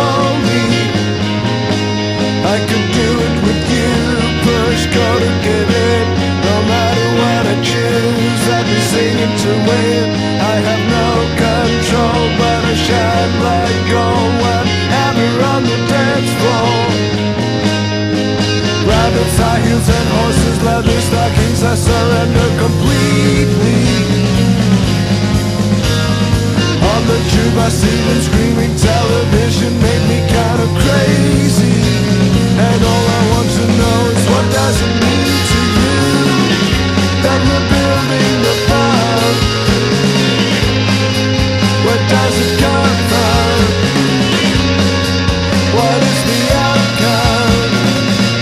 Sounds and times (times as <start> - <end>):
Music: 0.0 - 48.4.